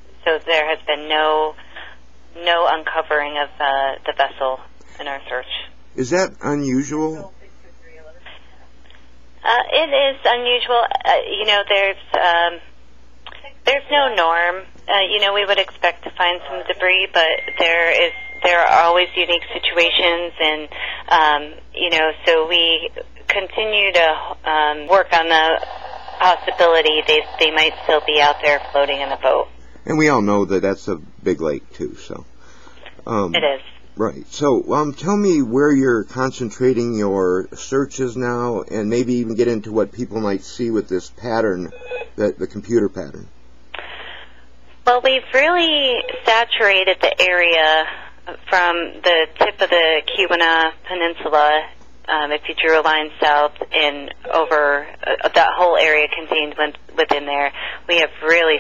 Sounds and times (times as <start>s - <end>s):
Speech: 0.2s - 8.3s, 9.4s - 12.6s, 13.3s - 25.6s, 26.2s - 32.2s, 33.0s - 43.9s, 44.9s - 58.6s.